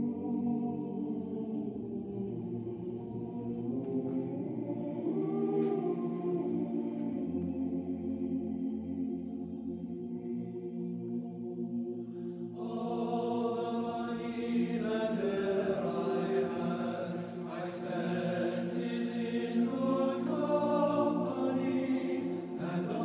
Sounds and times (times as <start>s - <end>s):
Music: 0.0s - 23.0s.